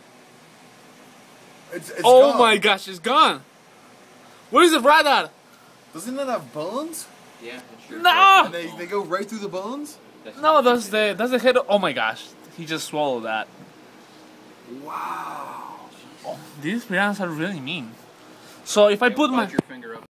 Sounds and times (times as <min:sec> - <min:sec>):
Speech: 0:18.7 - 0:20.1.